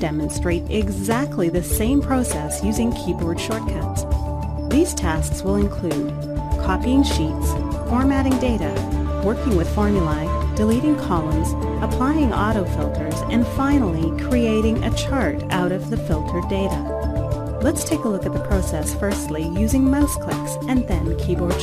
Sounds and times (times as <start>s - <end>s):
Speech: 0.0s - 4.0s, 4.7s - 16.8s, 17.6s - 21.6s
Music: 0.0s - 21.6s.